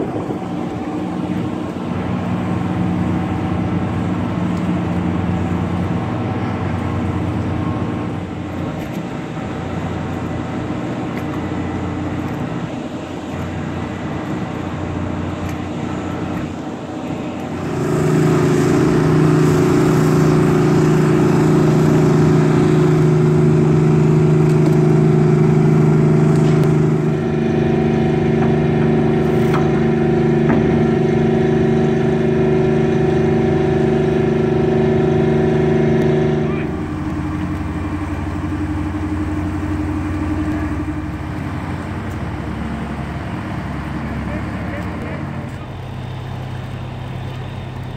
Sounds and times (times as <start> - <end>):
Motorboat, speedboat: 0.0 - 47.9.